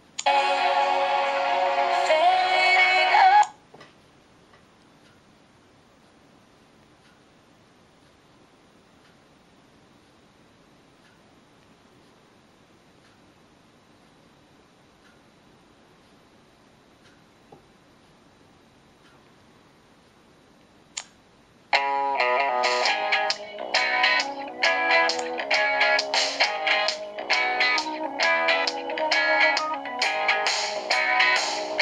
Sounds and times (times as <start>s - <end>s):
Music: 0.2s - 3.5s, 21.8s - 31.8s.